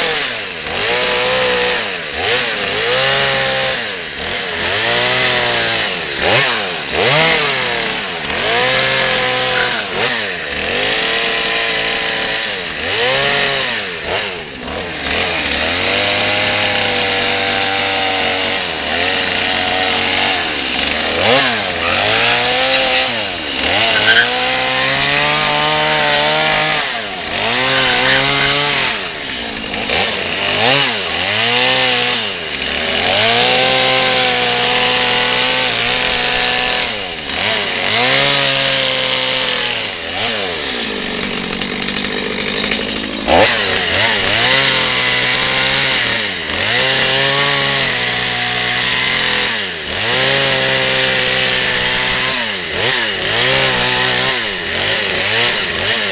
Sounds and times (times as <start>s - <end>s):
Chainsaw: 0.0s - 56.1s
Outside, rural or natural: 0.0s - 56.1s.